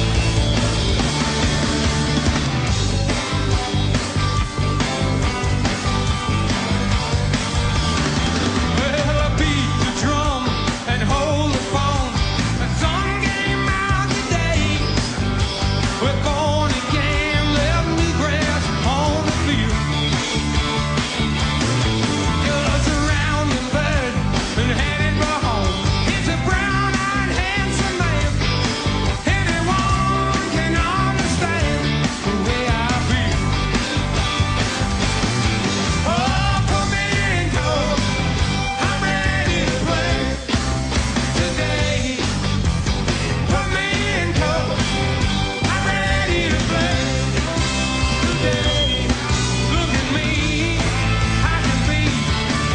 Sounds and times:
Pop music: 0.0 - 52.7.

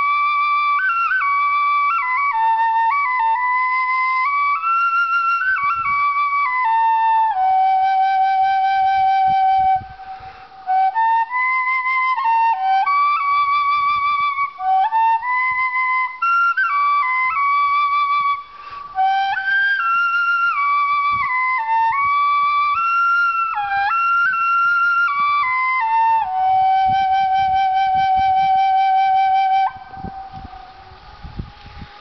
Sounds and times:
Flute: 0.0 - 32.0.

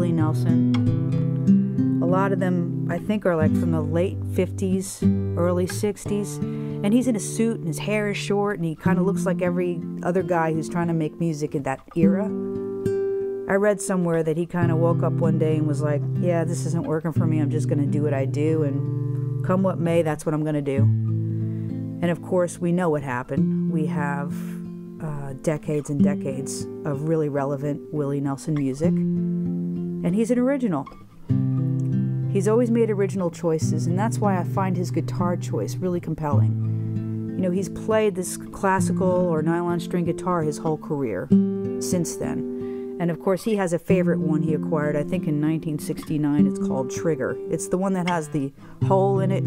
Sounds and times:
Speech: 0.0 - 0.6, 2.0 - 12.3, 13.5 - 18.8, 19.4 - 20.9, 22.0 - 29.0, 30.0 - 31.0, 32.3 - 36.6, 37.4 - 42.4, 43.0 - 49.4
Acoustic guitar: 0.0 - 49.4.

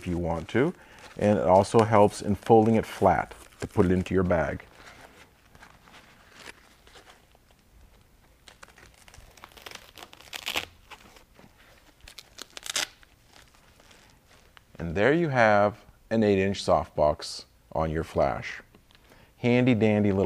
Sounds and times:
Speech: 0.0 - 4.7, 14.8 - 18.7, 19.4 - 20.2
Crumpling, crinkling: 0.0 - 14.8
Inside, small room: 0.0 - 20.2.

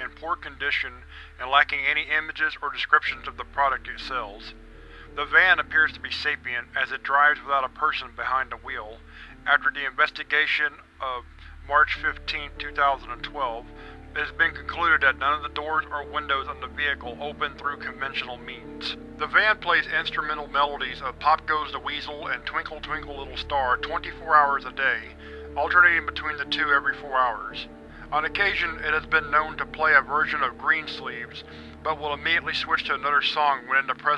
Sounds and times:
Music: 0.0 - 34.1
Narration, monologue: 0.0 - 34.1.

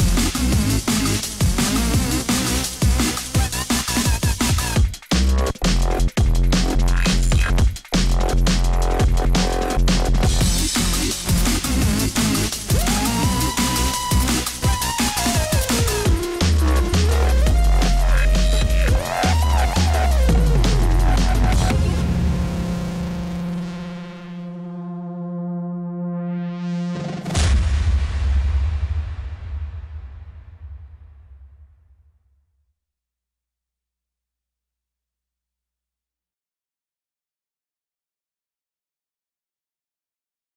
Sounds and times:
Silence: 27.4 - 32.6.

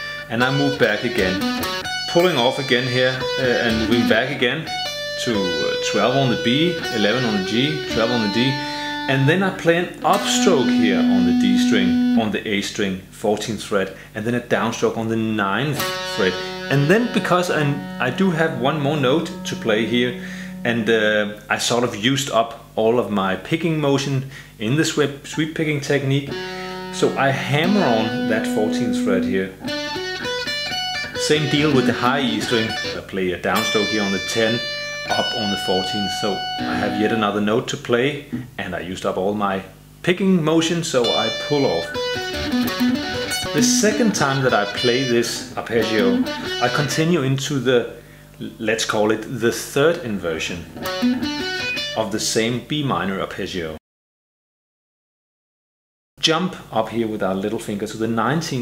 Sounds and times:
Tapping (guitar technique): 0.4 - 12.3, 15.8 - 21.0, 26.3 - 37.4, 41.0 - 47.0, 50.8 - 52.0.

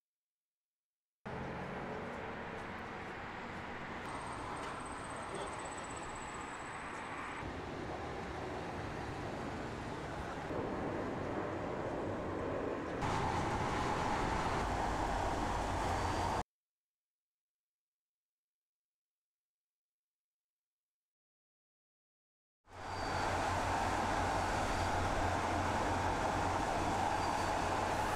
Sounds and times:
Wind: 1.3 - 16.4, 22.7 - 28.1.

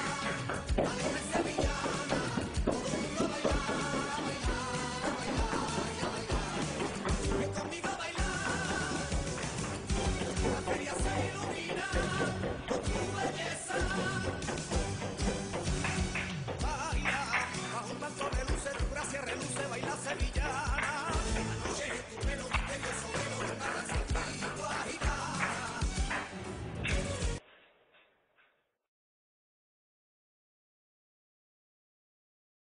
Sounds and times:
Music: 0.0 - 27.4.

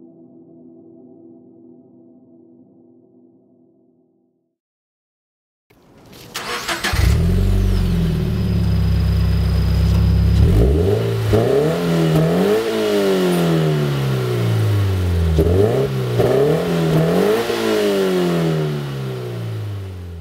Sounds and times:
Car: 5.8 - 20.2
Medium engine (mid frequency): 6.2 - 20.2
Accelerating, revving, vroom: 10.3 - 19.8.

